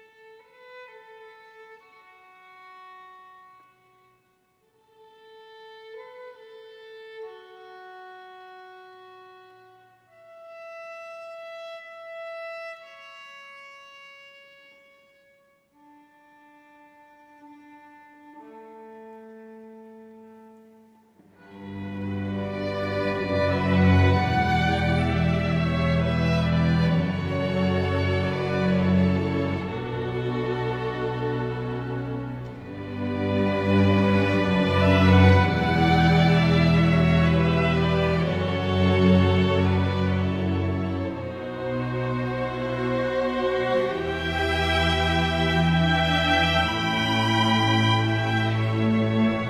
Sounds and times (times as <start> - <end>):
Music: 0.0 - 49.5.